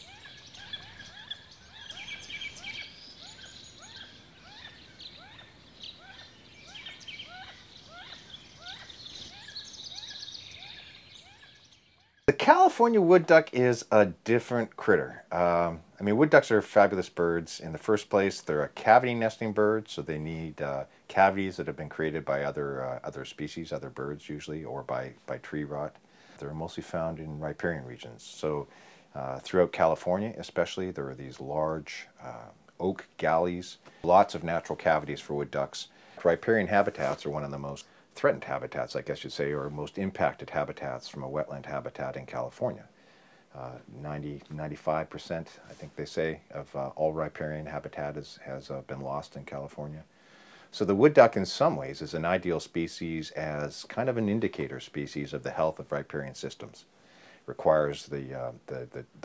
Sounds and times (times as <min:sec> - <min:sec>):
Speech: 0:12.3 - 0:42.9, 0:43.6 - 0:50.1, 0:50.7 - 0:56.9, 0:57.5 - 0:59.2.